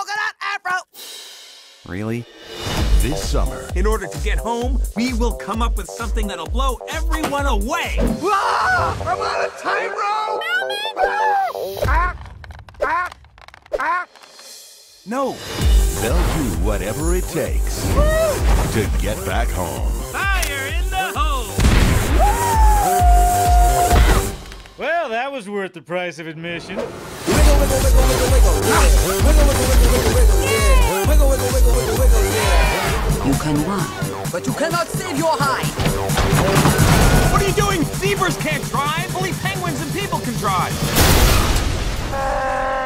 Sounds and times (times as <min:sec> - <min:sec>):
Speech: 0:00.0 - 0:00.9, 0:01.9 - 0:02.3, 0:03.0 - 0:08.0, 0:15.1 - 0:15.4, 0:16.0 - 0:17.8, 0:18.7 - 0:21.5, 0:24.8 - 0:29.7, 0:37.3 - 0:40.7
Music: 0:01.0 - 0:12.0, 0:14.1 - 0:24.8, 0:27.2 - 0:42.0.